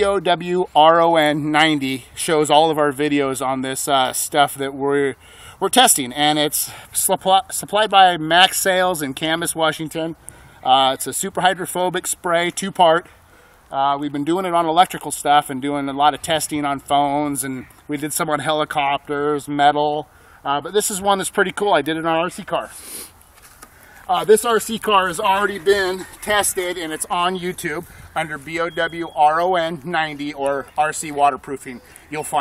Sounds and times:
Speech: 0:00.0 - 0:13.1, 0:13.7 - 0:22.8, 0:24.1 - 0:32.4.

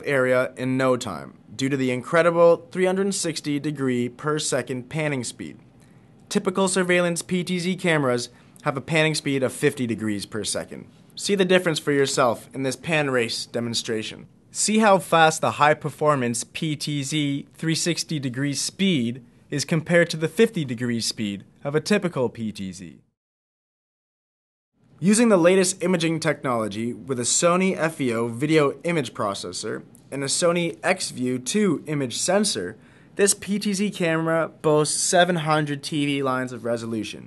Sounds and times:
Speech: 0:00.0 - 0:05.6, 0:06.3 - 0:23.2, 0:25.0 - 0:37.2.

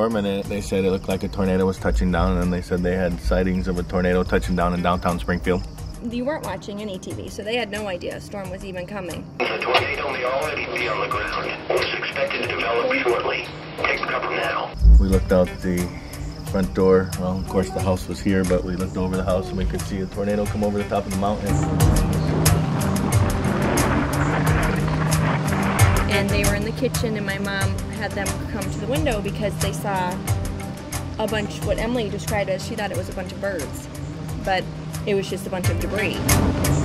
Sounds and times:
Speech: 0:00.0 - 0:15.9, 0:16.6 - 0:21.6, 0:26.1 - 0:30.2, 0:31.2 - 0:33.8, 0:34.4 - 0:36.2
Music: 0:00.0 - 0:36.8.

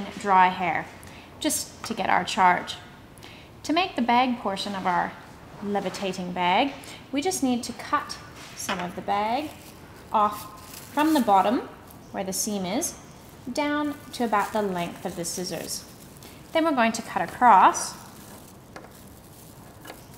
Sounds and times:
Speech: 0:00.0 - 0:02.8, 0:03.6 - 0:15.9, 0:16.6 - 0:18.1.

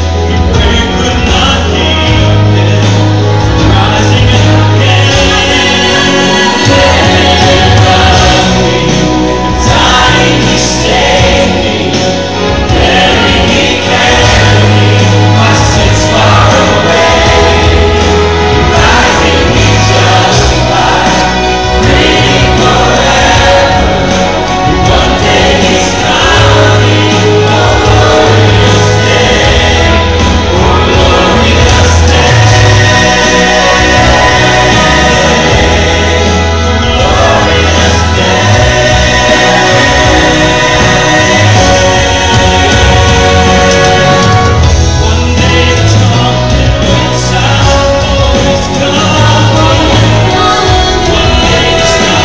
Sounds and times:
Singing: 0:00.0 - 0:52.2
Vocal music: 0:00.0 - 0:52.2.

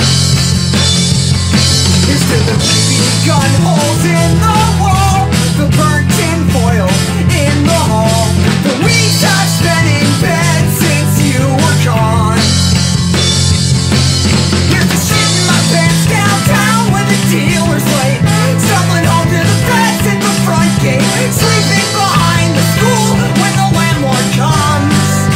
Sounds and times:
Music: 0:00.0 - 0:25.3.

